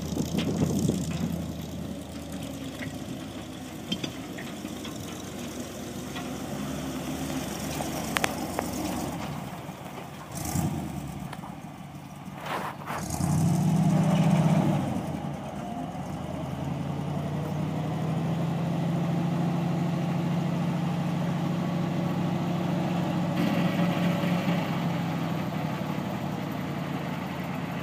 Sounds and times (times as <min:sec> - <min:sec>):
Truck: 0:00.0 - 0:27.8.